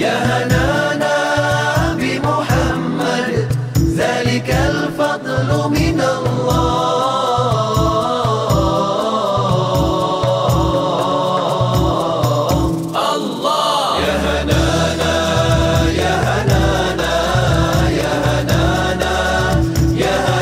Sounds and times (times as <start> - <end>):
Chant: 0.0 - 20.4.